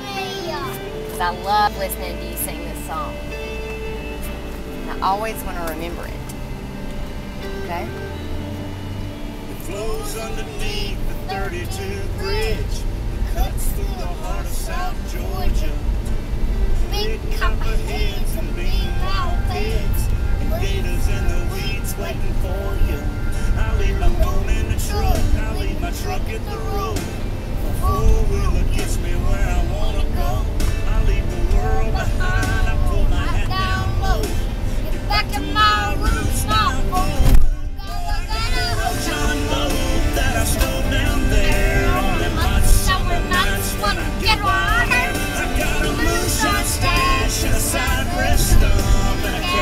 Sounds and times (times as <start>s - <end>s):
Child singing: 0.0s - 1.0s, 9.7s - 15.8s, 16.9s - 23.1s, 23.7s - 27.1s, 27.8s - 49.6s
Music: 0.0s - 49.6s
Male singing: 9.5s - 16.0s, 16.9s - 49.6s.